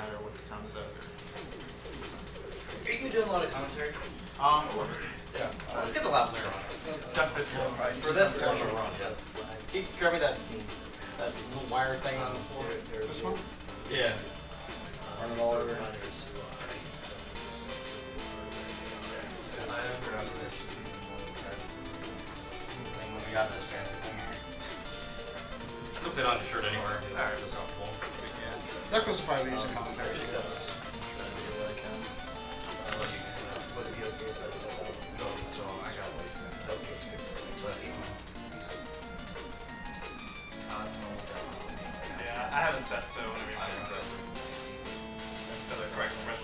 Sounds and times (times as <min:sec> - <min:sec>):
Music: 0:00.0 - 0:46.4.